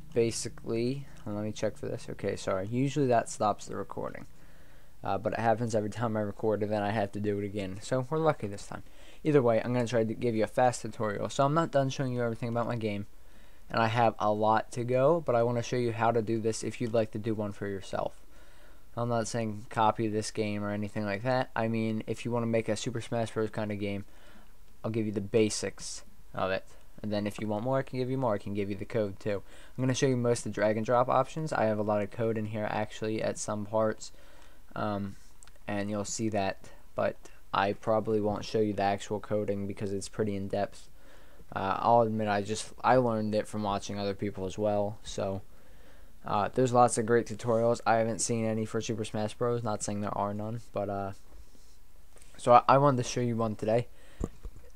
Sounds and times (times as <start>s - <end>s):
Speech: 0.0s - 4.3s, 5.0s - 13.1s, 13.7s - 18.2s, 19.0s - 24.1s, 24.8s - 40.9s, 41.5s - 45.4s, 46.2s - 51.3s, 52.4s - 53.9s.